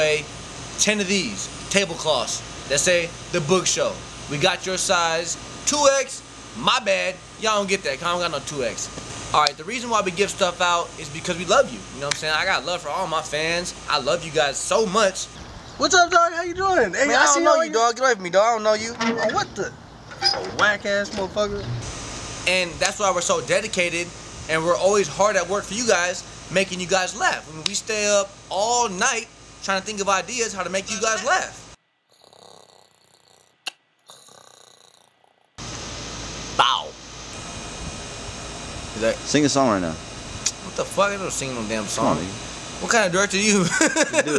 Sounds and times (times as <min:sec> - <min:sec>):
Speech: 0:00.0 - 0:19.7, 0:20.3 - 0:21.7, 0:22.5 - 0:31.6, 0:39.0 - 0:40.0, 0:40.6 - 0:44.3
Snoring: 0:32.1 - 0:35.4.